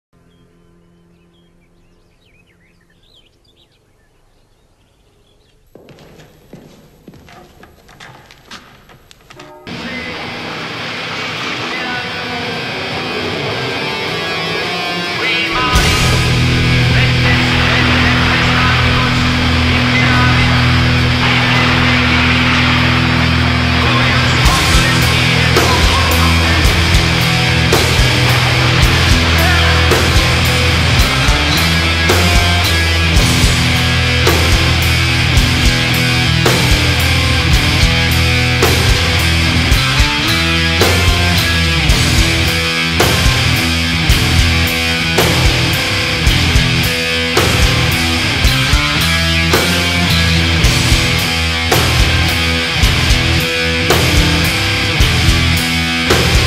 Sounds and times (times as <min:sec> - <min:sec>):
Bird vocalization, bird call, bird song: 0:00.2 - 0:05.7
Music: 0:09.4 - 0:56.4.